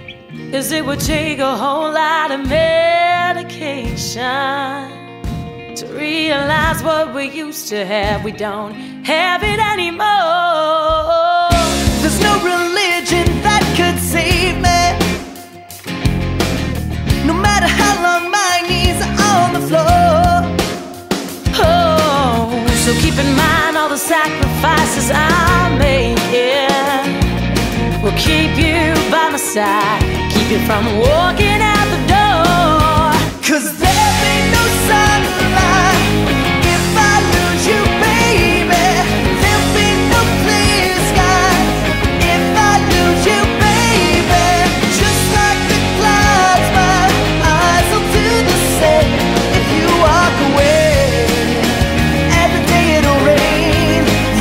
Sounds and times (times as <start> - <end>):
Music: 0.0 - 54.4.